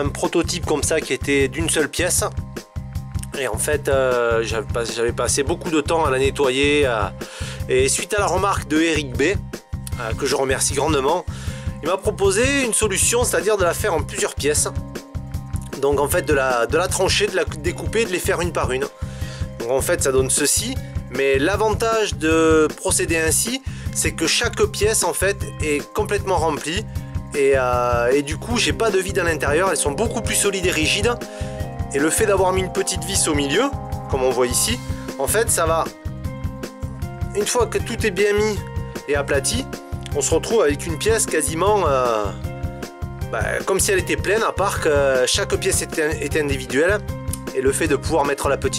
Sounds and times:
Speech: 0.0 - 2.3, 3.2 - 14.8, 15.6 - 18.9, 19.6 - 26.8, 27.4 - 31.3, 31.9 - 35.9, 37.3 - 42.4, 43.3 - 48.7
Music: 0.0 - 48.7.

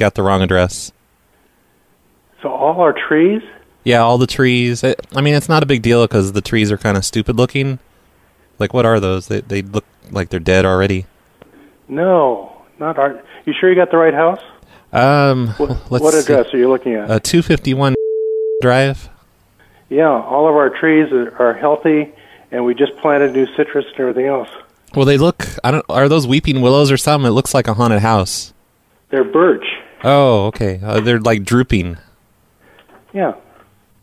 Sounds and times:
Speech: 0.0 - 1.0, 2.4 - 7.8, 8.6 - 11.1, 11.9 - 18.0, 18.6 - 19.2, 19.9 - 32.1, 33.1 - 33.5
Busy signal: 18.0 - 18.7.

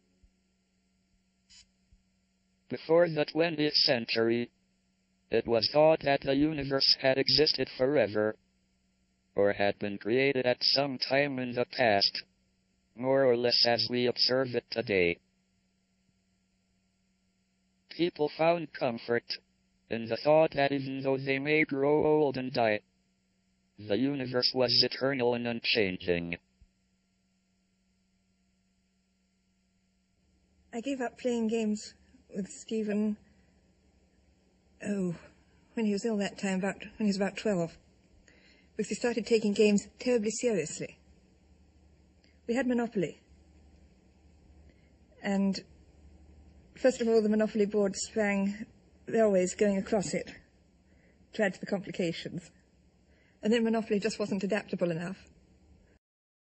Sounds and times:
Female speech, woman speaking: 30.8 - 33.2, 34.8 - 35.2, 35.8 - 37.8, 38.8 - 40.9, 42.5 - 43.1, 45.2 - 45.6, 46.8 - 50.4, 51.4 - 52.5, 53.4 - 55.2.

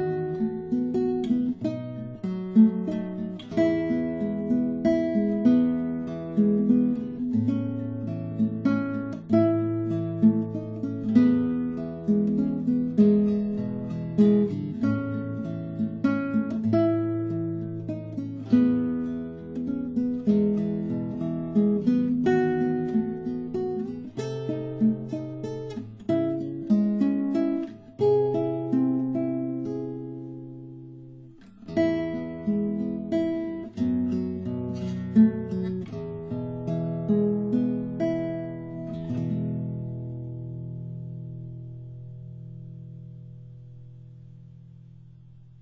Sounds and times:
Acoustic guitar: 0.0 - 45.6
Strum: 0.0 - 45.6.

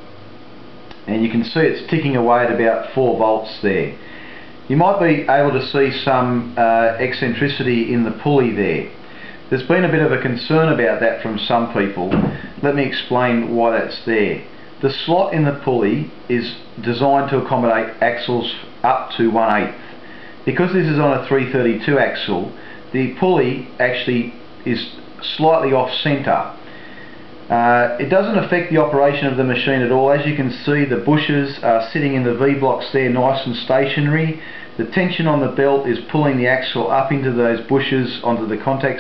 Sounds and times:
Speech: 1.0 - 4.0, 4.7 - 19.8, 20.5 - 26.6, 27.5 - 39.0.

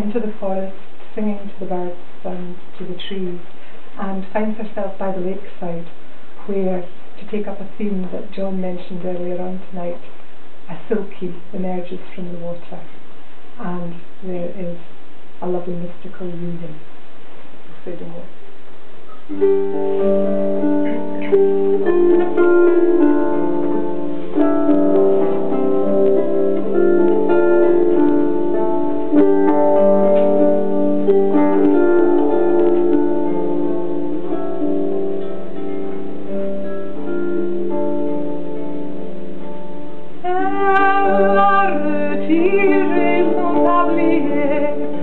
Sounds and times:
Keyboard (musical): 19.1 - 45.0.

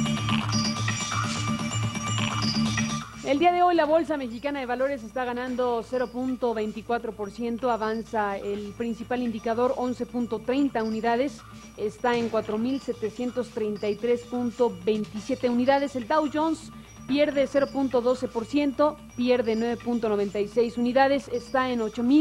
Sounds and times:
Music: 0.0 - 22.2
Speech: 3.2 - 22.2.

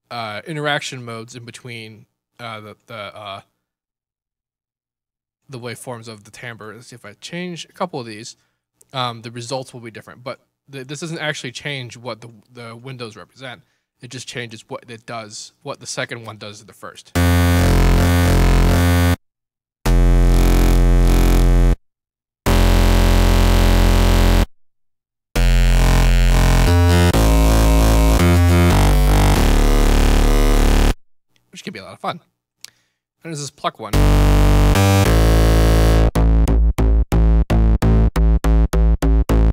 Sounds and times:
Speech: 0.1 - 3.5, 5.5 - 17.2, 31.5 - 32.3, 33.2 - 34.0
Electronic music: 17.2 - 19.2, 19.9 - 21.8, 22.5 - 24.5, 25.4 - 31.0, 33.9 - 39.5.

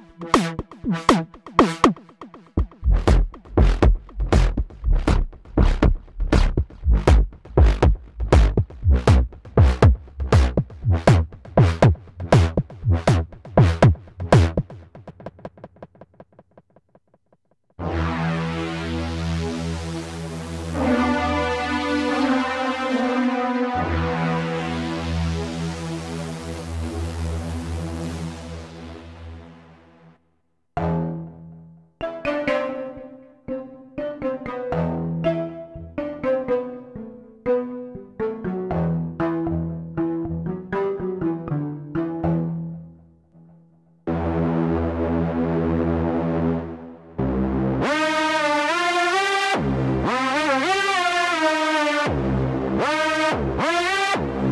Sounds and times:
Synthesizer: 0.0 - 15.5, 17.8 - 30.2, 30.8 - 54.5
Drum machine: 0.0 - 16.8.

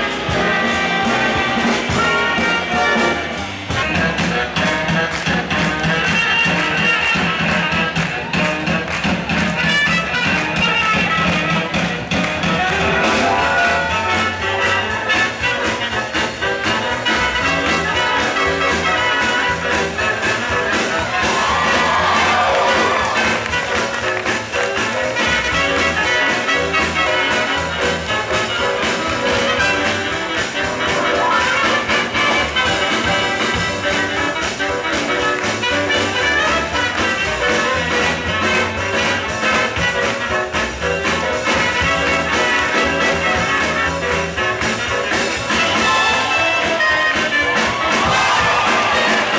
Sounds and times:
Music: 0.0 - 49.3.

